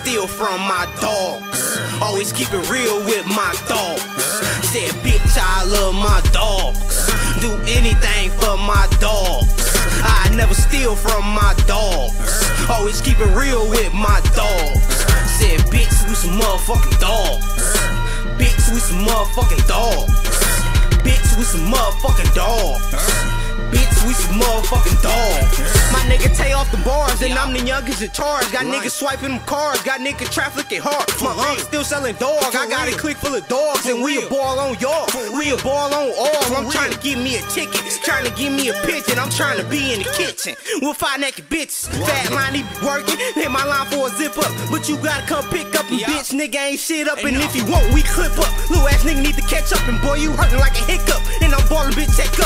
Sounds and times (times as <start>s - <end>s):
Music: 0.0s - 52.4s.